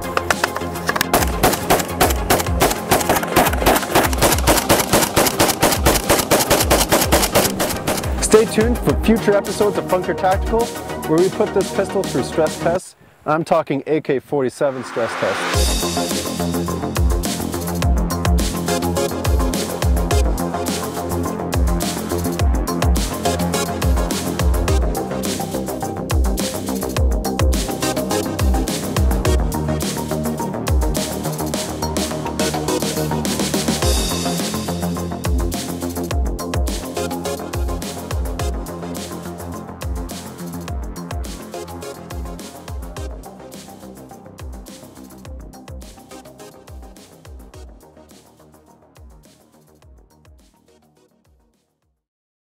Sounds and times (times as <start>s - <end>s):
Music: 0.0s - 12.9s, 14.7s - 52.1s
Machine gun: 1.1s - 8.1s
Speech: 8.2s - 15.4s.